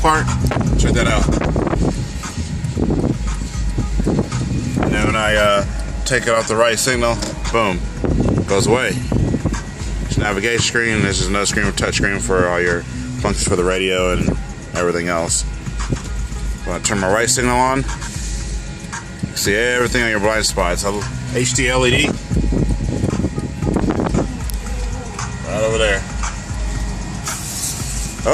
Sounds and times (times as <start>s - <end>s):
Speech: 0.0s - 1.4s, 4.9s - 7.8s, 8.5s - 9.0s, 10.1s - 15.5s, 16.7s - 17.9s, 19.4s - 22.1s
Music: 0.0s - 28.3s.